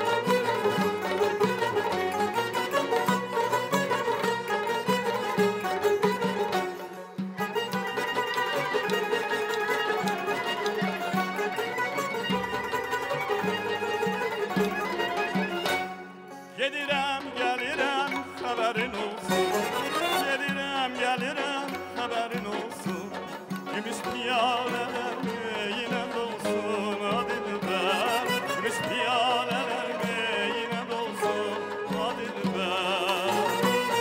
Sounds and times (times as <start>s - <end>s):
Music: 0.0s - 34.0s.